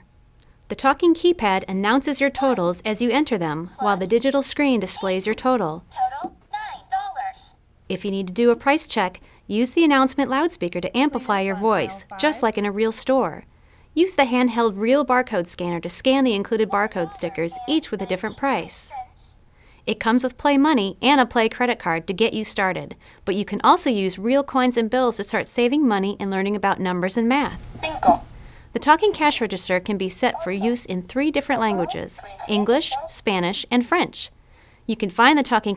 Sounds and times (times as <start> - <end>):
Speech: 0.7 - 13.4, 14.0 - 19.2, 19.9 - 28.2, 28.8 - 34.3, 34.9 - 35.7.